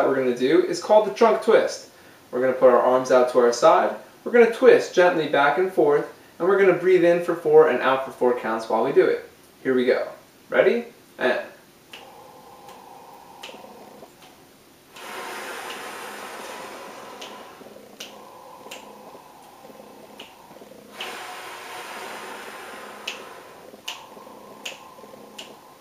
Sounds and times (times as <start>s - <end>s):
Speech: 0.0s - 11.6s
Snort: 11.9s - 25.8s.